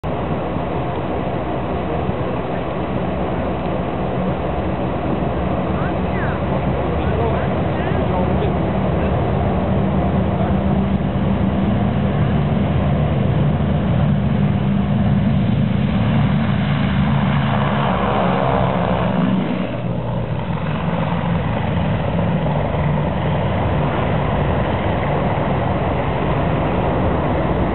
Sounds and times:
Aircraft: 0:00.0 - 0:27.7
Speech: 0:05.7 - 0:09.2.

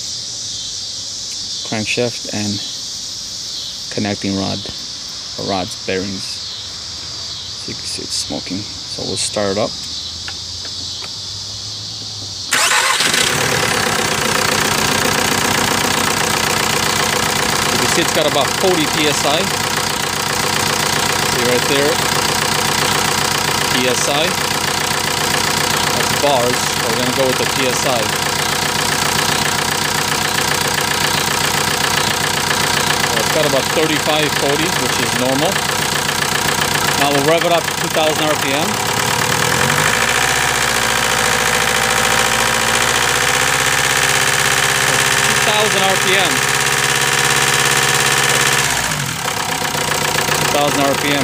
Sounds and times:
Speech: 0:01.7 - 0:02.7, 0:03.9 - 0:04.8, 0:05.4 - 0:06.4, 0:07.6 - 0:09.8, 0:17.7 - 0:19.6, 0:21.3 - 0:22.0, 0:23.7 - 0:24.4, 0:25.9 - 0:28.2, 0:33.1 - 0:35.6, 0:36.9 - 0:38.8, 0:45.3 - 0:46.4, 0:50.5 - 0:51.2.

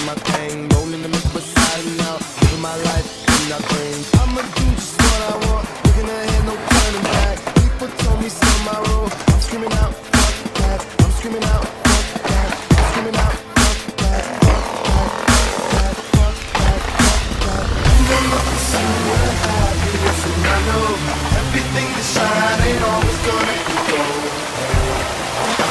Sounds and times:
Dubstep: 0:00.7 - 0:25.7.

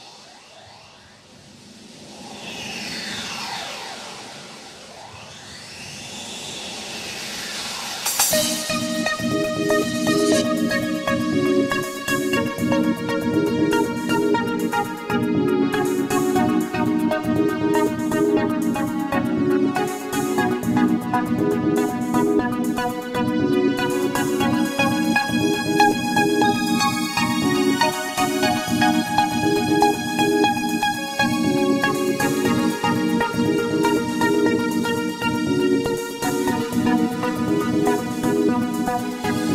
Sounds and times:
Music: 0:03.4 - 0:39.5.

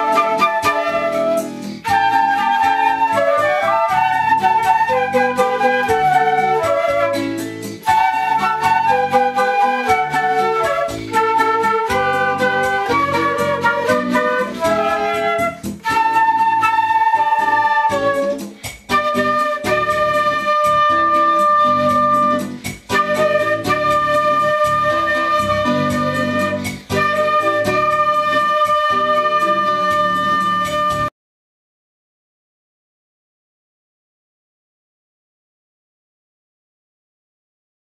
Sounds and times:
Flute: 0:00.0 - 0:31.1.

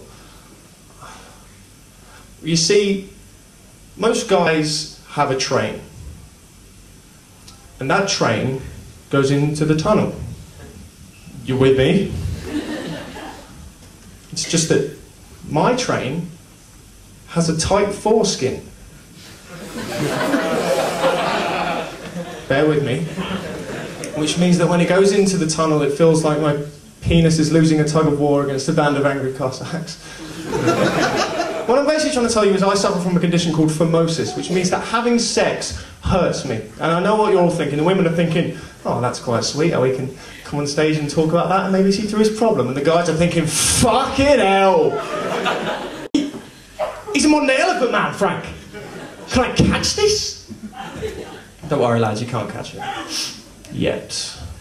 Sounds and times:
Speech: 0:02.4 - 0:03.2, 0:04.0 - 0:05.9, 0:07.8 - 0:10.3, 0:11.4 - 0:12.2, 0:14.3 - 0:16.4, 0:17.3 - 0:18.7, 0:22.5 - 0:23.2, 0:24.0 - 0:30.0, 0:31.7 - 0:45.0, 0:47.1 - 0:48.6, 0:49.3 - 0:50.5, 0:51.6 - 0:54.6.

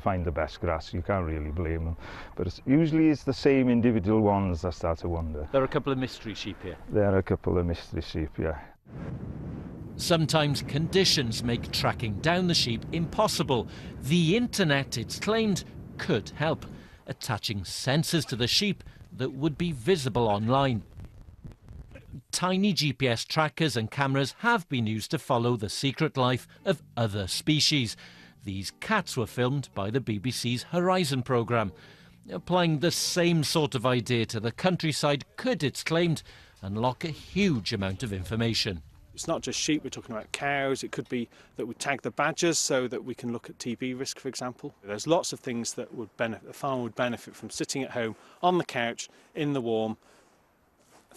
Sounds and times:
Speech: 0:00.0 - 0:08.7, 0:10.0 - 0:20.8, 0:22.0 - 0:50.0.

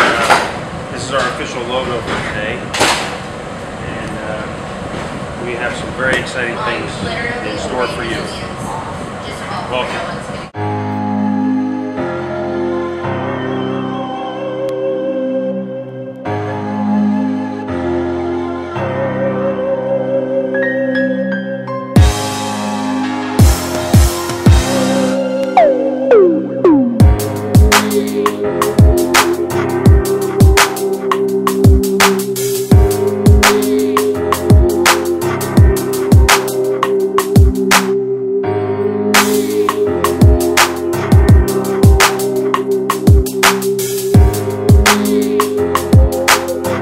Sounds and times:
Music: 0:10.6 - 0:46.8.

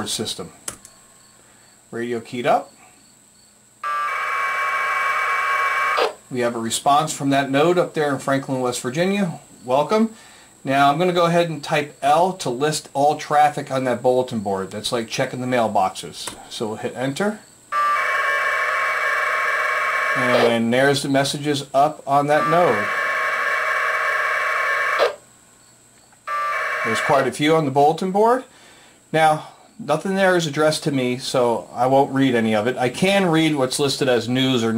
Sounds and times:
Speech: 0:00.0 - 0:00.6, 0:01.9 - 0:02.7, 0:06.3 - 0:17.4, 0:20.2 - 0:22.9, 0:26.9 - 0:28.5, 0:29.1 - 0:34.7.

